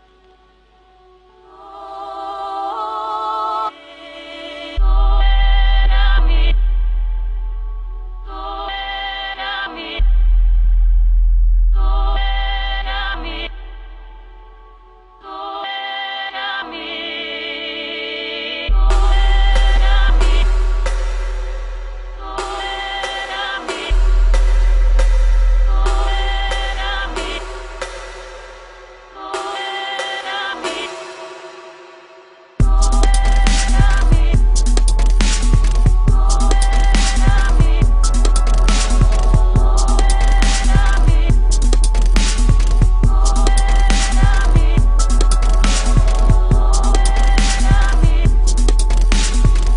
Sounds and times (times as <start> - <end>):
Music: 0.0 - 49.7.